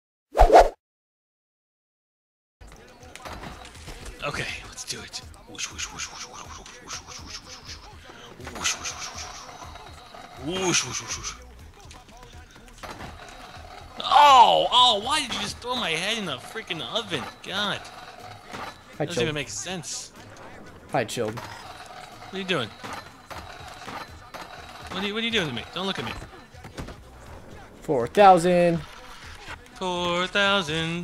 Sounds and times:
Speech: 0:04.2 - 0:09.7, 0:19.0 - 0:20.1, 0:24.9 - 0:26.4.

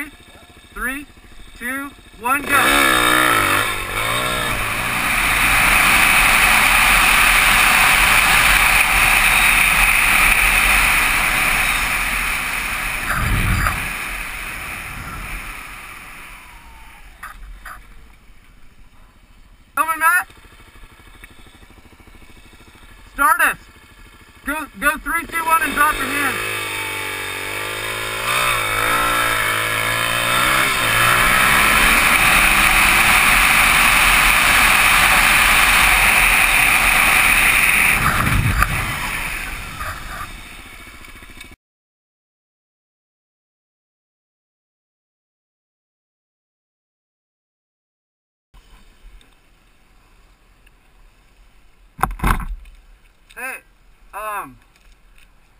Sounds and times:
Bicycle: 0:03.7 - 0:23.1, 0:27.0 - 0:41.6, 0:48.6 - 0:55.6.

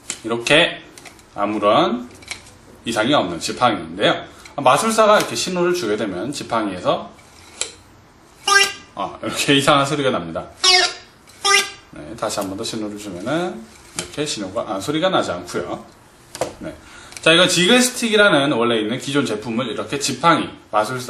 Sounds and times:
Speech: 0:00.2 - 0:02.1, 0:02.8 - 0:07.2, 0:08.5 - 0:21.0.

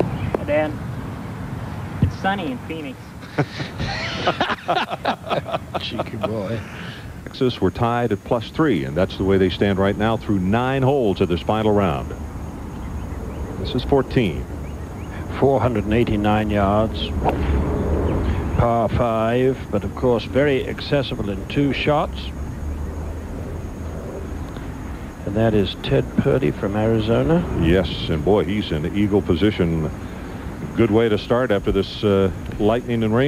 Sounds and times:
Speech: 0:00.0 - 0:00.8, 0:02.0 - 0:03.0, 0:05.2 - 0:12.2, 0:13.6 - 0:14.5, 0:15.2 - 0:17.2, 0:18.4 - 0:22.3, 0:25.2 - 0:30.0, 0:30.7 - 0:33.2.

